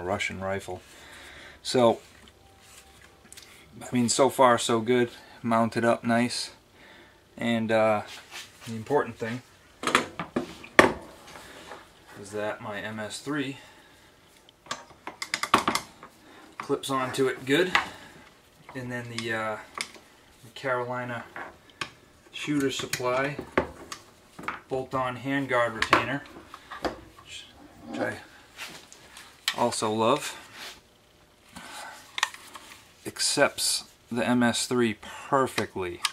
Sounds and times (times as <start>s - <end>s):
Speech: 0.0s - 0.8s, 1.6s - 2.0s, 3.8s - 6.6s, 7.4s - 9.5s, 12.2s - 13.6s, 16.6s - 17.8s, 18.7s - 19.7s, 20.4s - 21.3s, 22.3s - 23.4s, 24.7s - 26.3s, 27.2s - 28.3s, 29.5s - 30.4s, 33.1s - 36.1s
Inside, small room: 0.0s - 36.1s.